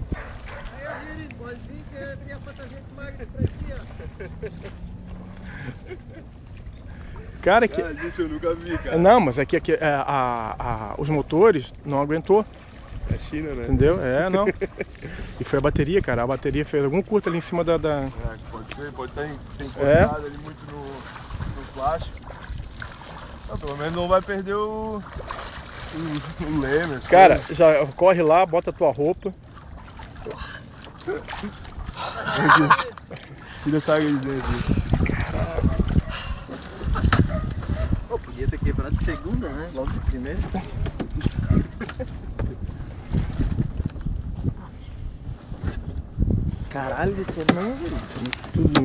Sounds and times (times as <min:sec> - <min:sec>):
Sailboat, sailing ship: 0:00.0 - 0:48.8.